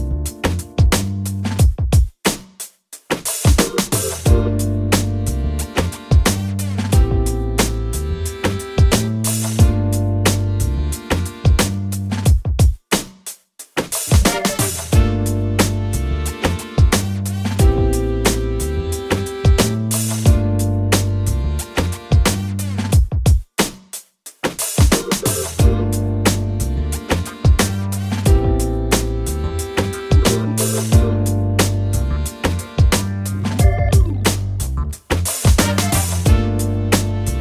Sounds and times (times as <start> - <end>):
Drum and bass: 0.0 - 2.1, 3.1 - 12.7, 13.8 - 23.4, 24.5 - 37.4.